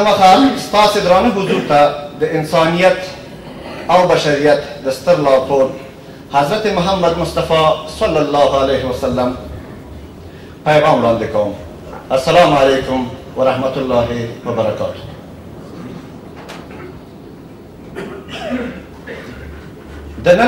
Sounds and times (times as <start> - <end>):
Male speech, man speaking: 0.0 - 3.2, 3.9 - 9.5, 10.6 - 15.2, 20.2 - 20.4
Narration, monologue: 0.0 - 20.4.